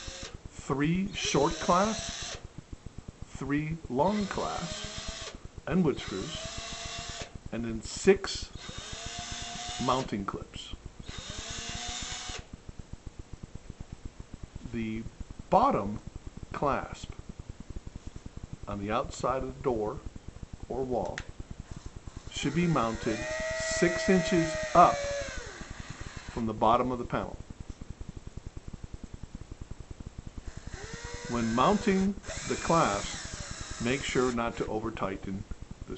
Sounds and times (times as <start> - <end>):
Speech: 0.6 - 2.0, 3.4 - 4.8, 5.7 - 6.4, 7.5 - 8.5, 9.8 - 10.8, 14.6 - 17.2, 18.7 - 20.1, 20.7 - 21.3, 22.3 - 25.1, 26.4 - 27.4, 31.3 - 33.2, 33.8 - 35.9.